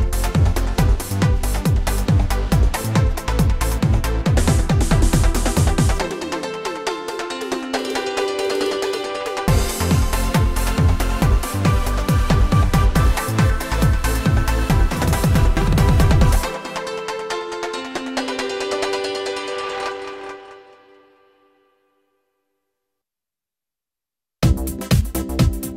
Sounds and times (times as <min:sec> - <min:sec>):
Exciting music: 0:00.0 - 0:20.6.